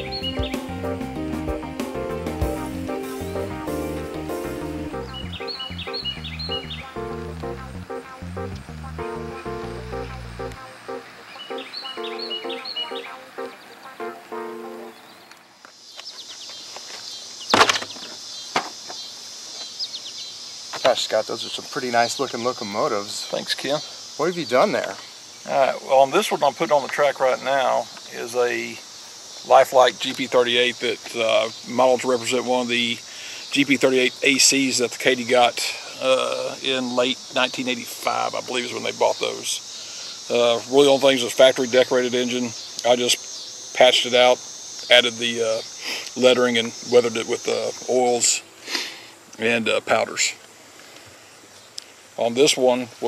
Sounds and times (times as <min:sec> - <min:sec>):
Music: 0:00.0 - 0:15.0.